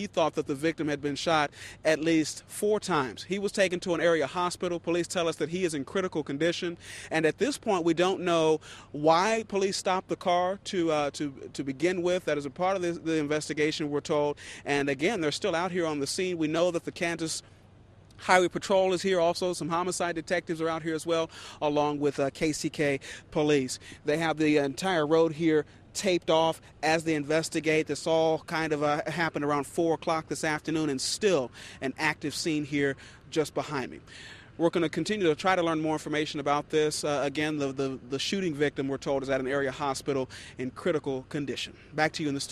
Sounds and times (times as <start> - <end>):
Speech: 0.0 - 17.4, 18.2 - 42.5.